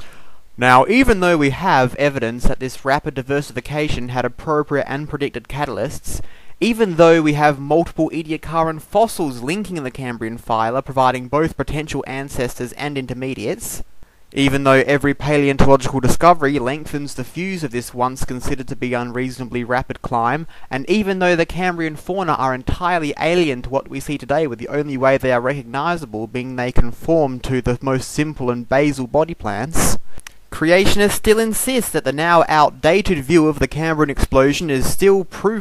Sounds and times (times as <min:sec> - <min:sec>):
Speech: 0:00.6 - 0:35.6.